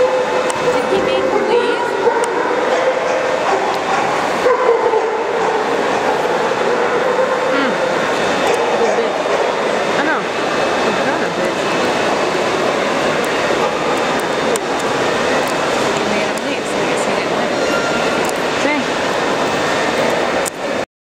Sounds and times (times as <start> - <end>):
Speech: 0.7 - 2.0, 18.6 - 18.9.